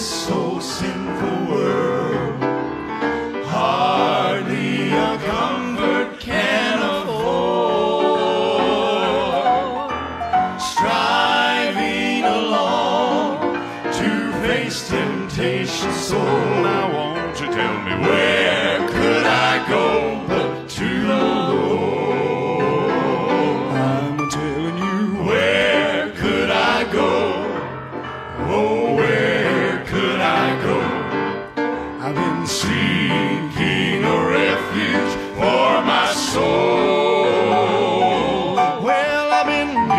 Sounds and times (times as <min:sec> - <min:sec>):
Music: 0:00.0 - 0:39.9.